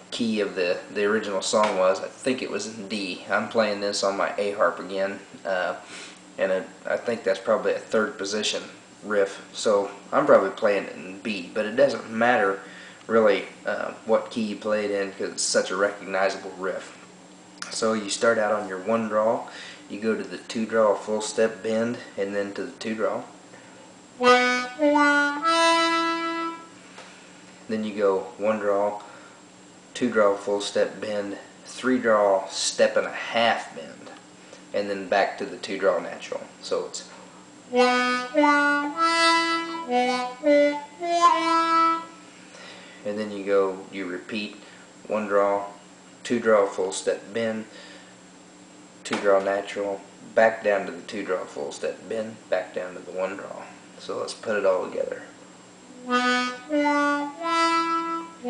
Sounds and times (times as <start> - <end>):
Speech: 0.1 - 17.0, 17.6 - 23.3, 27.7 - 29.1, 30.0 - 37.1, 43.0 - 47.7, 49.0 - 55.4.